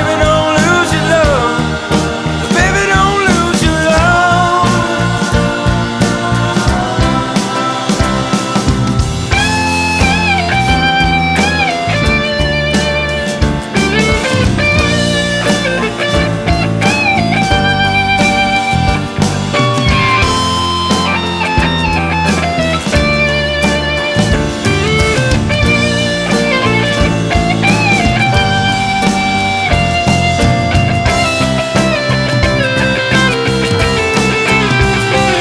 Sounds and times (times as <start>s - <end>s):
Psychedelic rock: 0.0s - 35.4s.